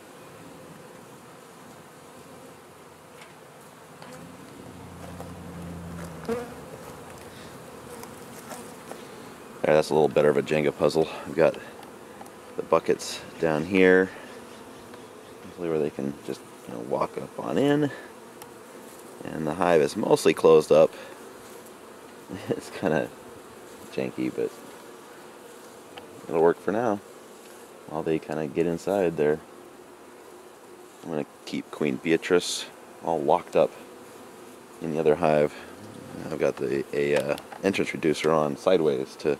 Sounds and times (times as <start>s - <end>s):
Bee, wasp, etc.: 0.0s - 39.4s
Fly, housefly: 0.0s - 39.4s.